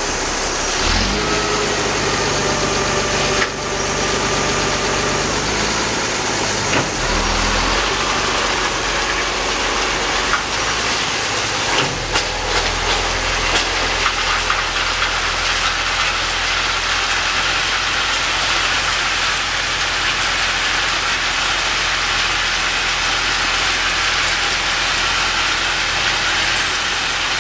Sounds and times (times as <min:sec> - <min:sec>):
Railroad car, train wagon: 0:00.0 - 0:27.4
Train: 0:00.0 - 0:27.4.